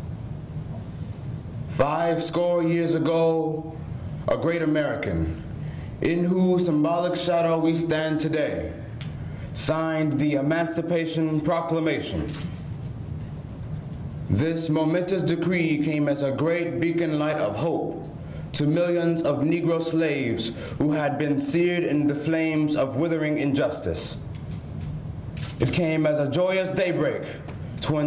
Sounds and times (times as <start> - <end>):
Male speech, man speaking: 1.8 - 5.4, 6.0 - 8.8, 9.6 - 12.3, 14.3 - 18.0, 18.6 - 24.2, 25.6 - 28.0.